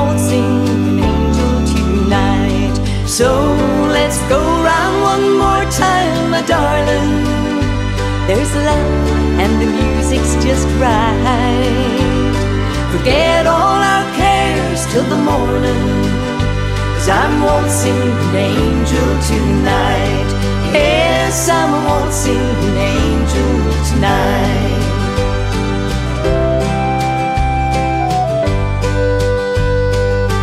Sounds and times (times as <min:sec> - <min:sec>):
Singing: 0:00.0 - 0:25.3
Music: 0:00.0 - 0:30.4.